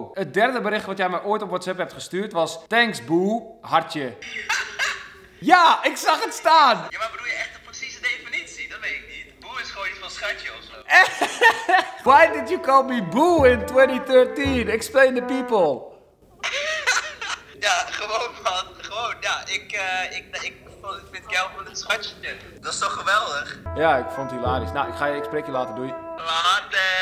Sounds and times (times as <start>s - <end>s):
Conversation: 0.0s - 27.0s
Music: 12.1s - 15.9s, 23.7s - 26.6s.